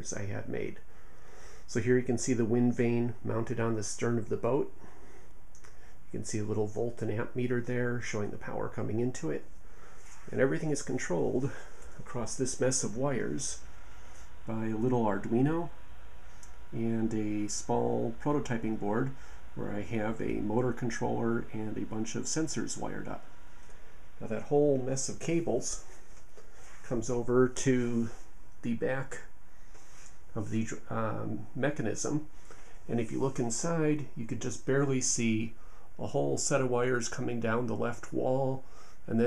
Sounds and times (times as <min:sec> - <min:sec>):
Speech: 0:00.0 - 0:00.9, 0:01.7 - 0:04.8, 0:06.1 - 0:09.5, 0:10.3 - 0:13.7, 0:14.5 - 0:15.8, 0:16.7 - 0:23.2, 0:24.2 - 0:25.9, 0:26.8 - 0:29.3, 0:30.3 - 0:32.3, 0:32.9 - 0:39.2.